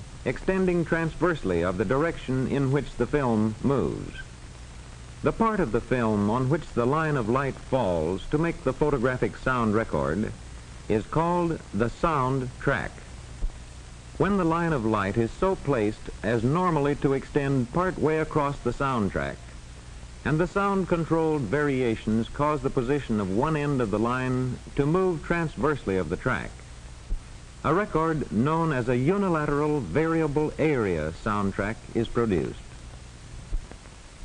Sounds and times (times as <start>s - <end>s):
Speech: 0.2s - 4.3s, 5.2s - 13.1s, 14.2s - 19.5s, 20.2s - 26.6s, 27.6s - 32.8s.